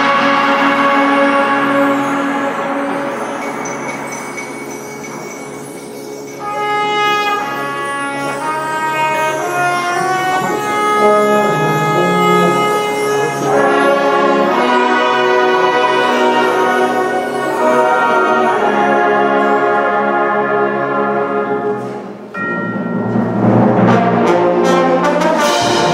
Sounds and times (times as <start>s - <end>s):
Orchestra: 0.0s - 25.9s.